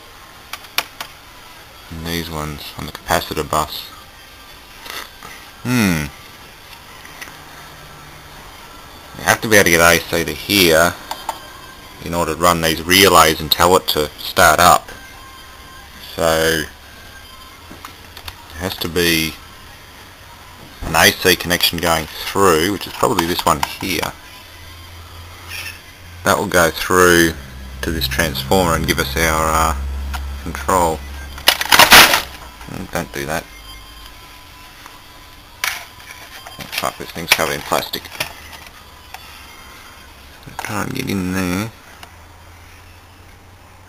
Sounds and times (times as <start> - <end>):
Speech: 1.9 - 4.0, 9.2 - 11.0, 12.0 - 14.9, 16.0 - 16.7, 18.5 - 19.4, 20.8 - 24.2, 26.2 - 29.8, 30.4 - 31.0, 32.7 - 33.5, 36.8 - 38.2, 40.5 - 41.8.